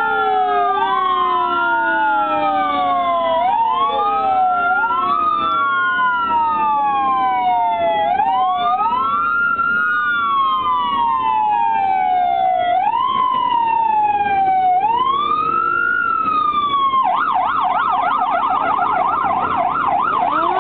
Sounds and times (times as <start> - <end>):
Police car (siren): 0.0 - 20.6.